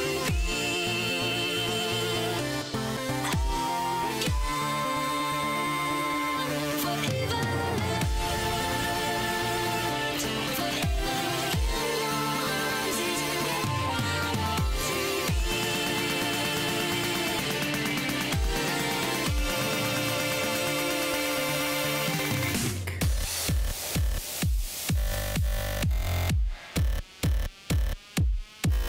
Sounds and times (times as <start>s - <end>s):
Music: 0.0s - 28.8s.